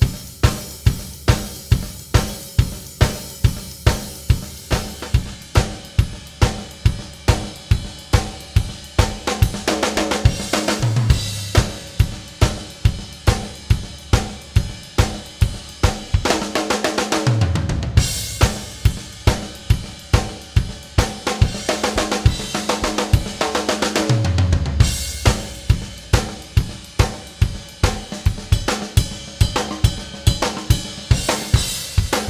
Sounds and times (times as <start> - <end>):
Music: 0.0 - 32.2.